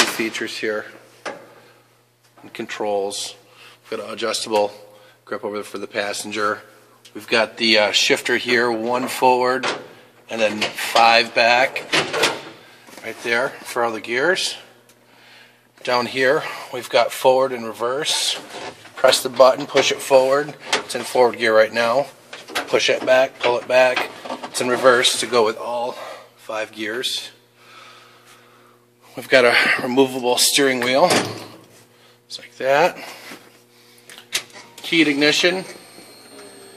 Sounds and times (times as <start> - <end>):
Speech: 0.0 - 1.0, 2.4 - 9.7, 10.3 - 11.9, 13.0 - 14.7, 15.8 - 27.4, 29.1 - 31.3, 32.3 - 33.1, 34.8 - 35.8.